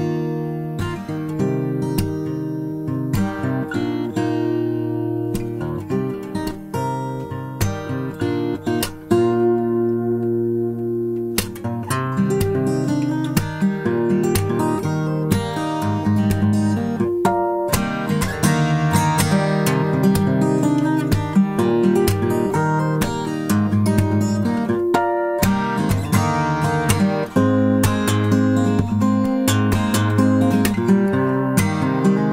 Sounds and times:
Acoustic guitar: 0.0 - 32.3
Strum: 0.0 - 32.3.

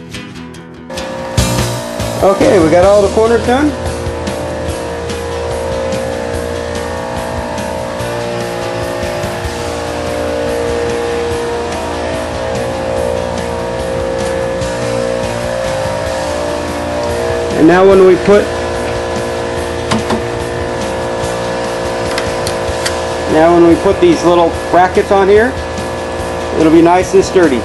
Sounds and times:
Music: 0.0 - 27.6
Speech: 2.2 - 3.8, 17.6 - 18.5, 23.3 - 25.6, 26.6 - 27.6.

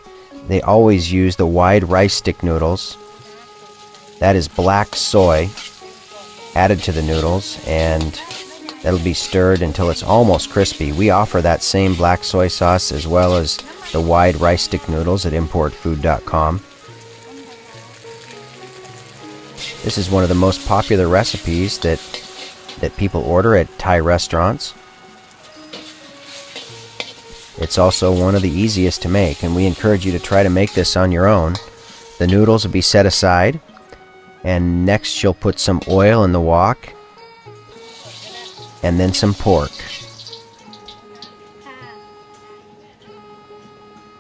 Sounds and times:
Music: 0.0 - 44.2
Speech: 0.5 - 3.0, 4.2 - 5.5, 6.6 - 16.6, 19.8 - 22.0, 22.8 - 24.8, 27.6 - 31.6, 32.2 - 33.6, 34.5 - 36.9, 38.2 - 40.0.

